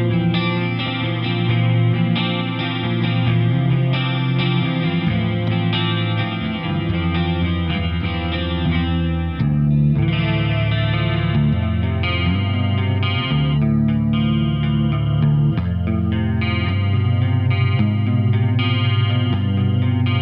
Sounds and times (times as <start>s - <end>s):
Electric guitar: 0.0s - 20.2s
Steel guitar, slide guitar: 0.0s - 20.2s.